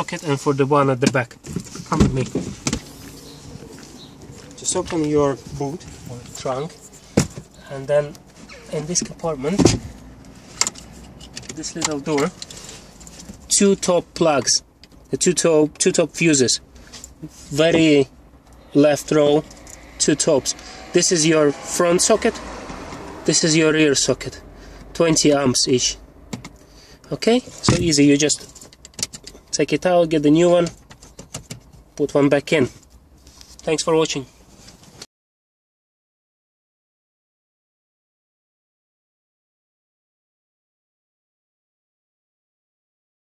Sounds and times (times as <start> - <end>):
Vehicle: 0.0 - 35.1.